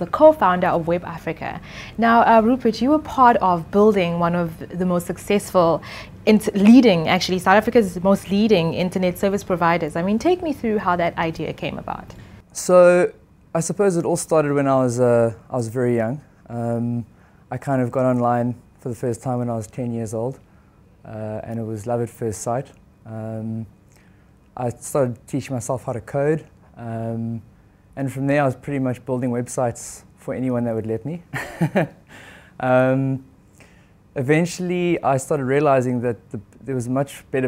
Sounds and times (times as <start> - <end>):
Speech: 0.0 - 20.4, 21.1 - 23.7, 24.6 - 31.2, 34.2 - 37.4.